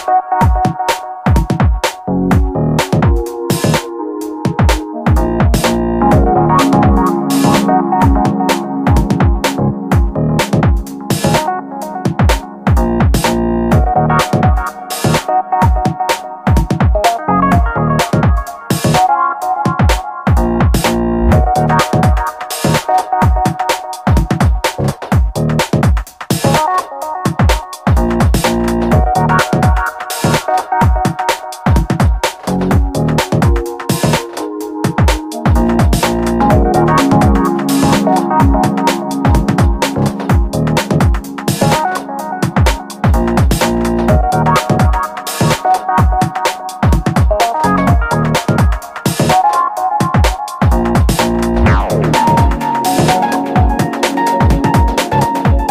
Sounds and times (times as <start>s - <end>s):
Dance music: 0.0s - 55.7s
Rhythm and blues: 0.0s - 55.7s.